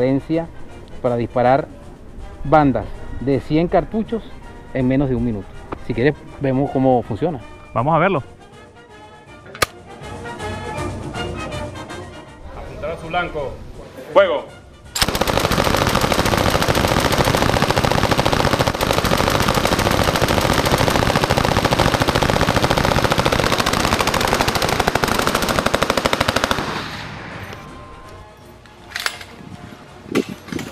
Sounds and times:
Music: 0:00.0 - 0:15.6, 0:27.3 - 0:30.7
Machine gun: 0:15.0 - 0:26.9.

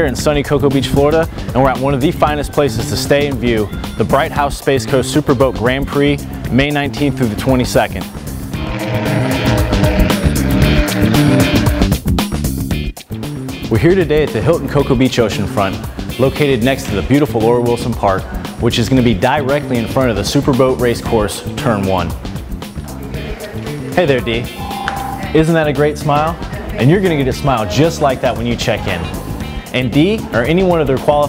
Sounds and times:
Speech: 0:00.0 - 0:08.1, 0:13.7 - 0:22.2, 0:23.1 - 0:24.5, 0:25.2 - 0:31.2
Music: 0:00.0 - 0:31.2.

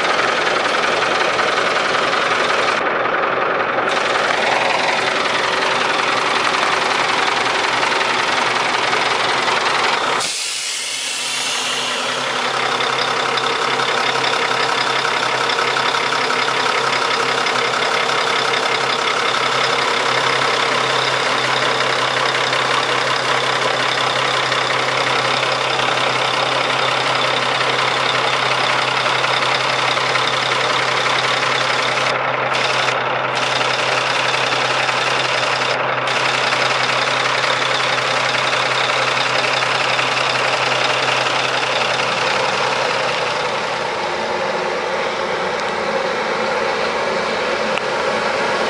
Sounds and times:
Truck: 0:00.0 - 0:48.6.

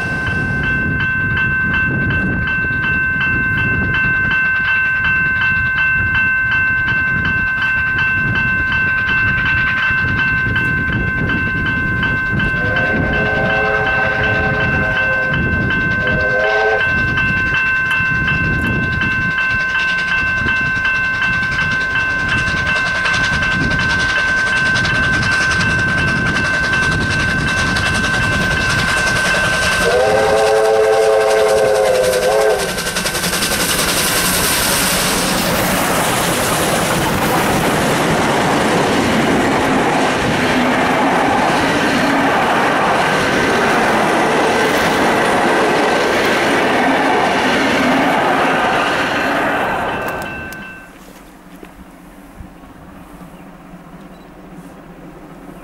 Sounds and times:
Railroad car, train wagon: 0:00.0 - 0:55.6
Train: 0:00.0 - 0:55.6.

